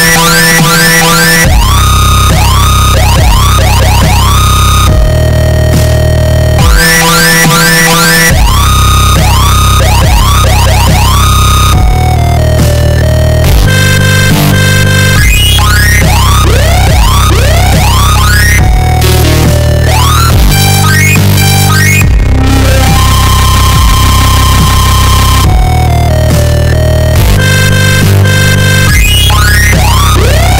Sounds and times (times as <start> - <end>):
Dubstep: 0.0 - 30.5.